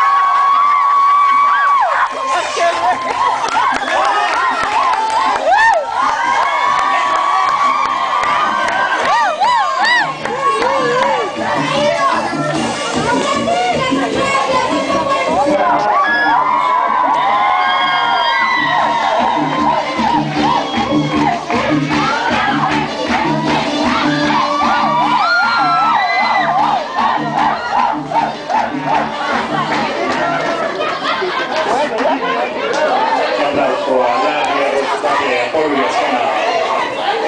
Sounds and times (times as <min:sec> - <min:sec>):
Music: 0:00.0 - 0:37.2.